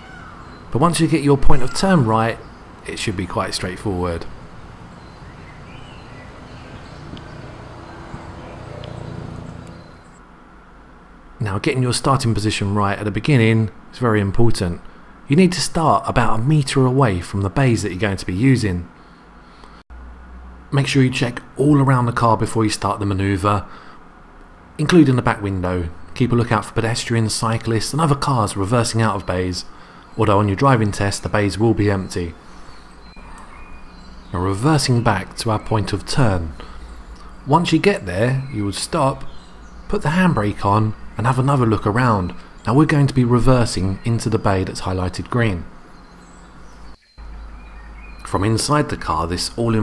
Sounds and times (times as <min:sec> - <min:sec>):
Narration, monologue: 0:00.0 - 0:19.8, 0:20.4 - 0:49.8.